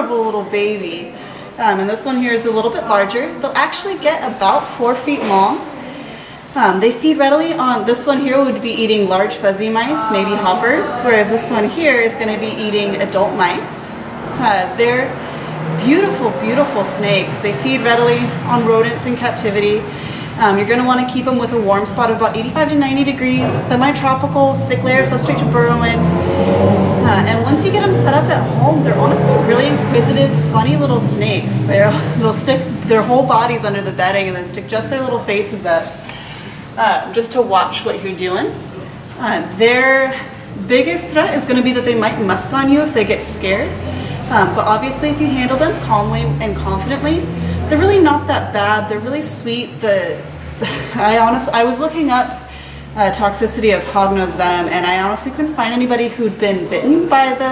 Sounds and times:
Speech: 0.0s - 5.7s, 6.6s - 15.2s, 15.8s - 36.0s, 36.8s - 50.3s, 51.0s - 57.5s.

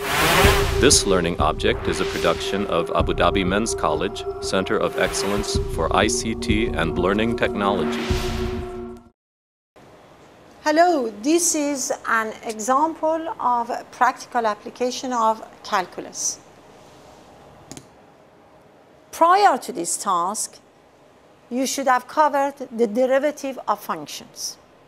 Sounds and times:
Speech: 0.4s - 8.0s, 10.6s - 16.4s, 19.2s - 20.6s, 21.5s - 24.6s.

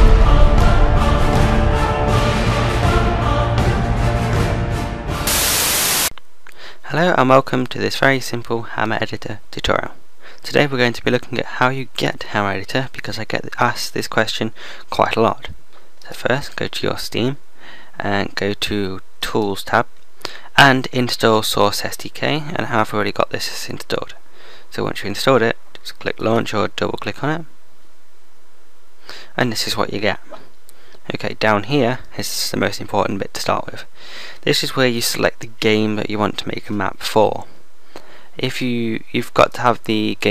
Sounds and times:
Speech: 6.8s - 17.4s, 18.0s - 19.9s, 20.5s - 27.5s, 29.4s - 30.4s, 31.0s - 37.5s, 38.4s - 40.3s.

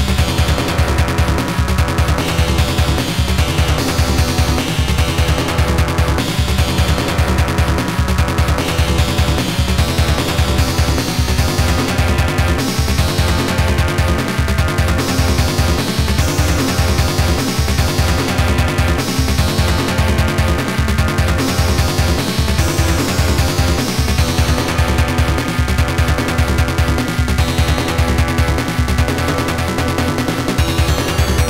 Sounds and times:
Music: 0.0s - 31.4s.

